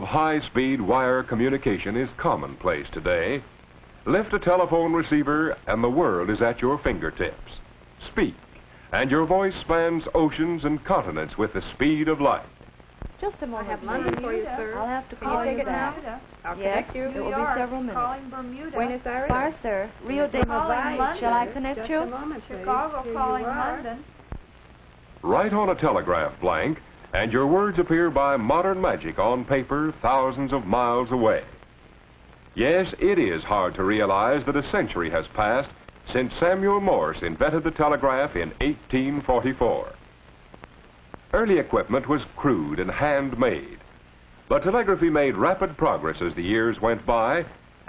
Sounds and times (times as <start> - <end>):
Speech: 0.0 - 3.5, 4.1 - 12.5, 13.2 - 24.0, 25.2 - 31.6, 32.6 - 40.0, 41.4 - 43.8, 44.5 - 47.8.